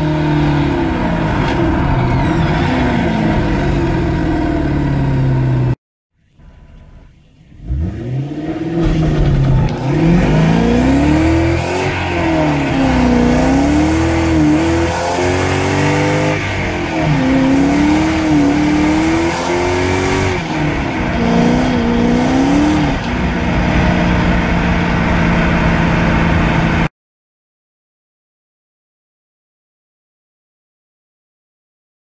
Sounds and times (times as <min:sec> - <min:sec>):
Car: 0:00.0 - 0:26.9
Medium engine (mid frequency): 0:00.0 - 0:26.9
Accelerating, revving, vroom: 0:07.6 - 0:24.2.